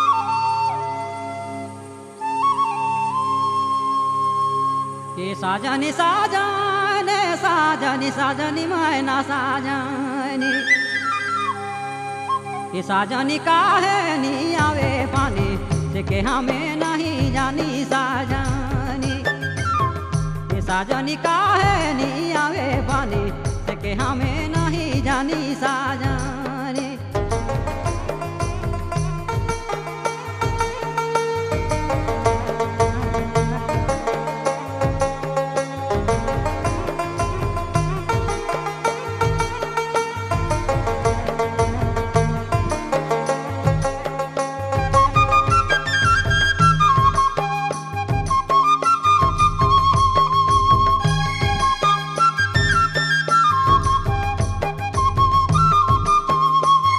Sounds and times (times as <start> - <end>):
Music: 0.0 - 56.9.